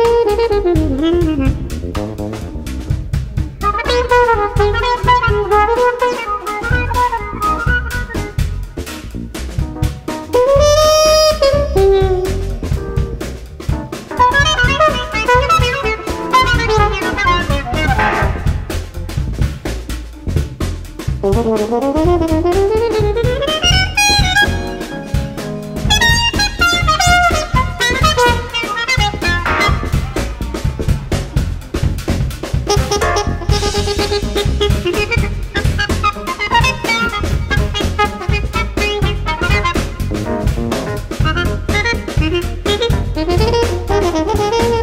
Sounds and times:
Trumpet: 0.0s - 19.4s, 21.0s - 44.8s
Jazz: 0.0s - 44.8s
Swing music: 0.0s - 44.8s.

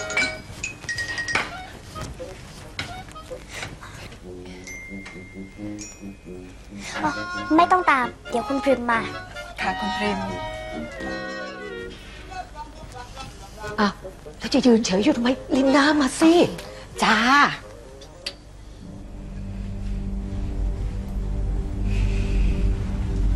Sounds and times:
Music: 0.0s - 12.6s, 13.6s - 23.3s.

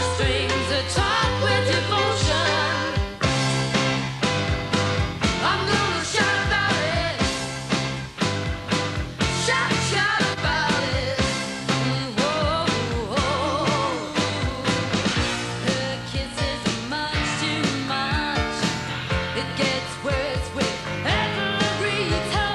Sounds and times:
Music: 0.0s - 22.5s.

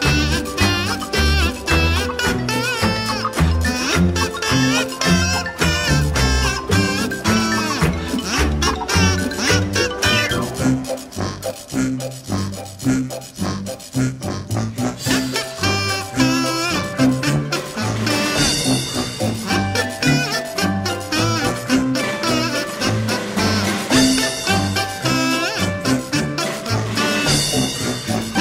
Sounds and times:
Video game music: 0.0s - 13.9s, 15.1s - 28.4s.

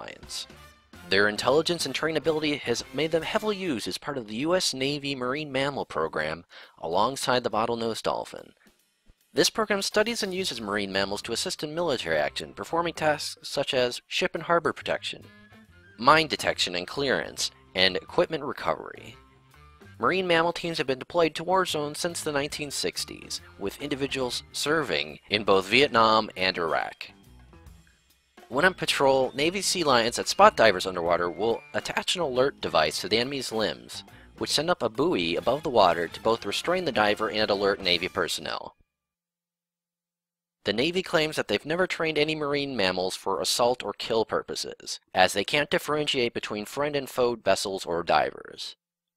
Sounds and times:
Speech: 0.0s - 0.5s, 1.1s - 8.6s, 9.4s - 15.3s, 16.0s - 19.2s, 20.0s - 27.1s, 28.5s - 38.8s, 40.7s - 48.8s
Music: 0.0s - 38.9s, 40.7s - 44.6s.

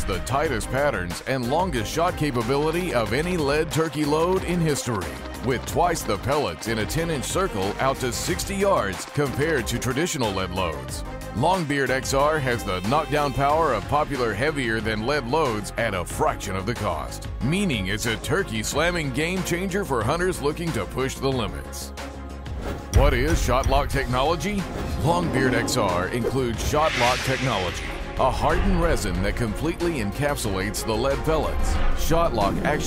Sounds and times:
Speech: 0.0s - 21.9s, 23.0s - 32.8s
Music: 0.0s - 32.8s.

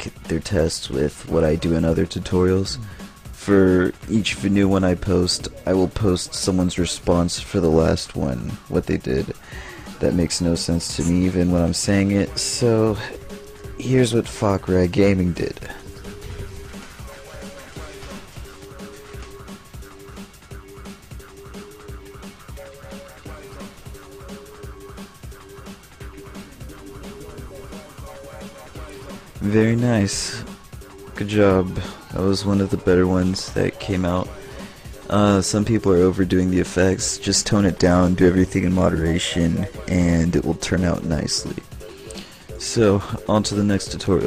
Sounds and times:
Speech: 0.0s - 9.4s, 10.0s - 13.2s, 13.8s - 15.9s, 29.4s - 30.5s, 31.2s - 34.4s, 35.0s - 41.6s, 42.6s - 44.2s
Music: 0.0s - 44.2s.

